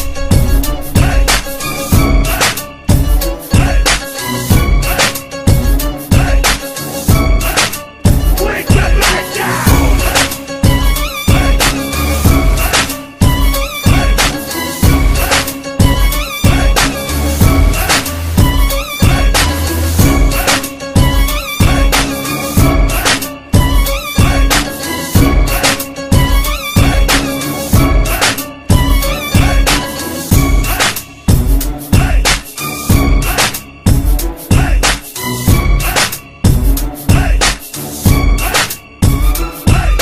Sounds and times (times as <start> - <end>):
Rhythm and blues: 0.0 - 40.0.